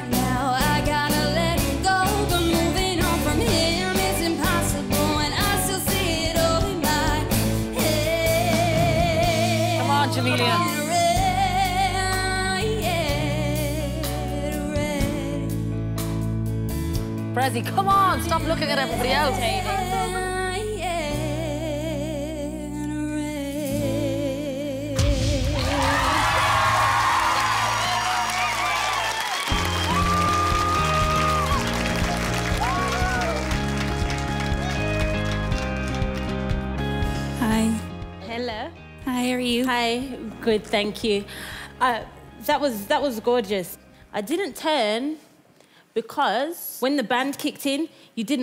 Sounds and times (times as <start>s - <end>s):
Pop music: 0.0s - 16.2s, 17.2s - 21.9s, 23.4s - 40.6s.